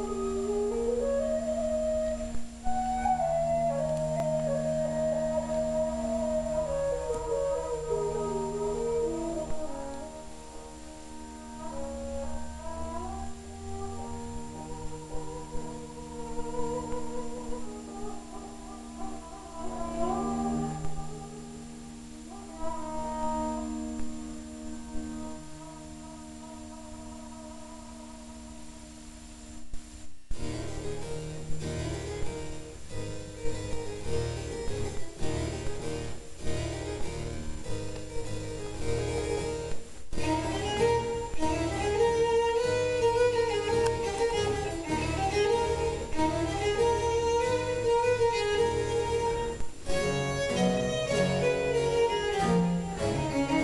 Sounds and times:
Music: 0.0 - 53.6.

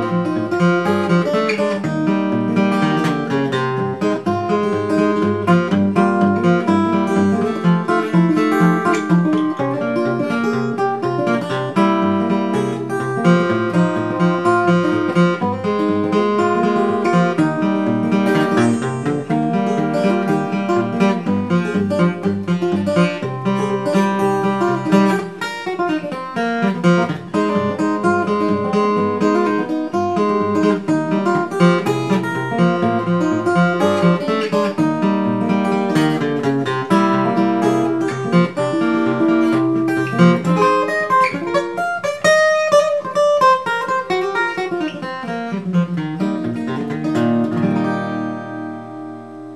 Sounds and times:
Acoustic guitar: 0.0 - 49.5
Country: 0.0 - 49.5.

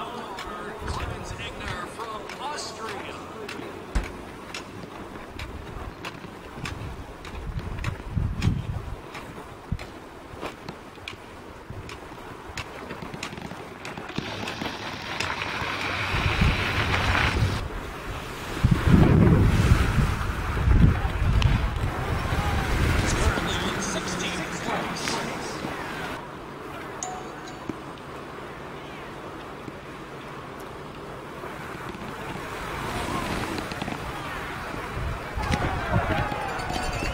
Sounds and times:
Outside, rural or natural: 0.0 - 37.1.

